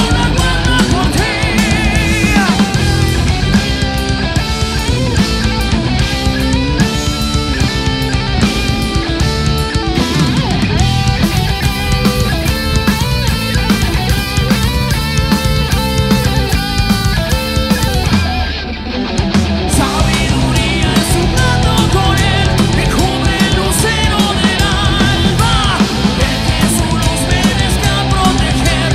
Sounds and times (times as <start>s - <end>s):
Singing: 0.0s - 3.3s, 19.7s - 28.9s
Heavy metal: 0.0s - 28.9s.